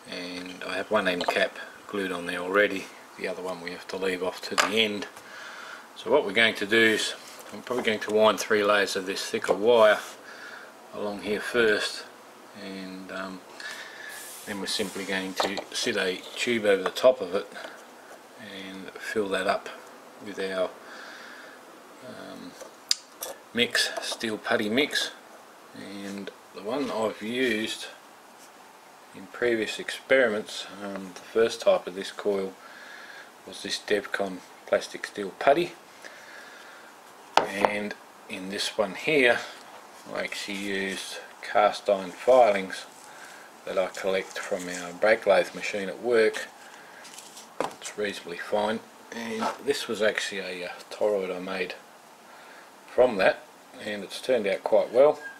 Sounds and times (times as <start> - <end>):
Speech: 0.0 - 5.2, 6.0 - 10.2, 10.9 - 13.5, 14.4 - 17.8, 18.4 - 20.8, 22.0 - 22.6, 23.5 - 25.2, 25.8 - 28.0, 29.2 - 32.6, 33.5 - 35.8, 37.4 - 43.0, 43.6 - 46.5, 47.8 - 51.8, 52.9 - 55.3.